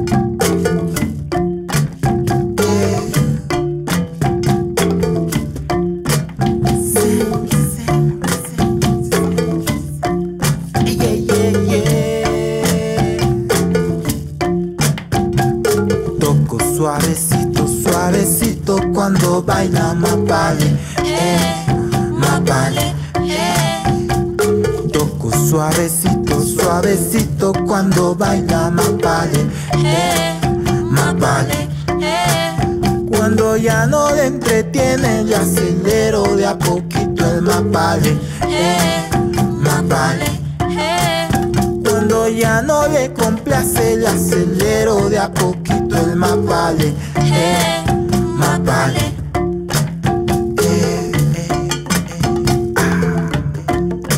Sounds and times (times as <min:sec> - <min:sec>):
Marimba, xylophone: 0:00.0 - 0:54.1.